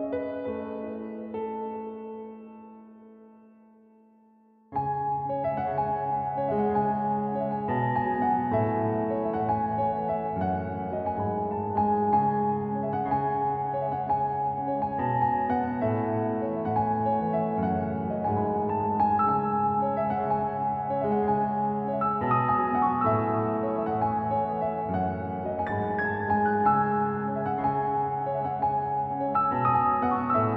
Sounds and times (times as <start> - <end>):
Keyboard (musical): 0.0 - 30.5.